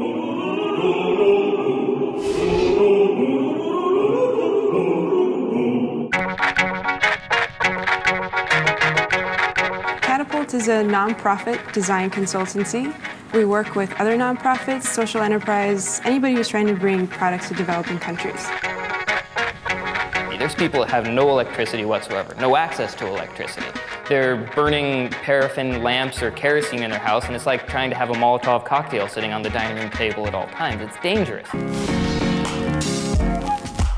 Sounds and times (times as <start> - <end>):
Music: 6.1 - 33.9
Speech: 10.1 - 18.5, 20.4 - 31.6.